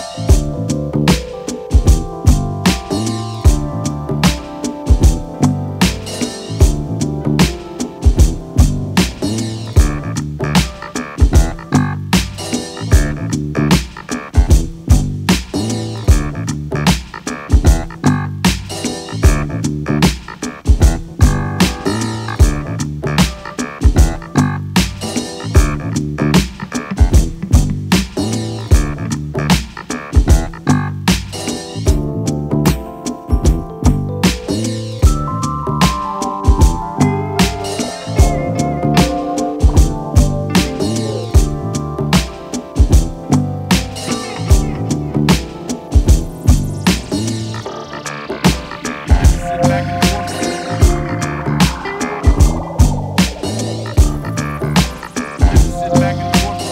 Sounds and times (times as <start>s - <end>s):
Music: 0.0s - 56.7s.